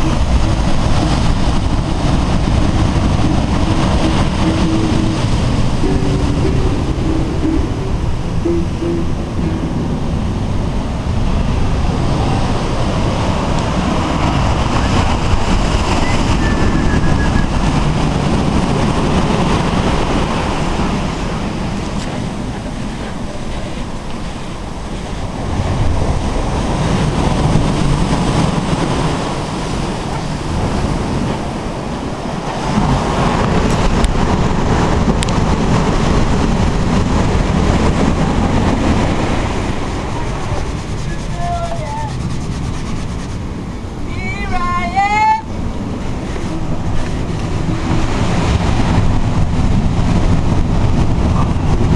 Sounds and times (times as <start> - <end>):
Waves, surf: 0.0 - 51.9
Wind noise (microphone): 0.0 - 51.9.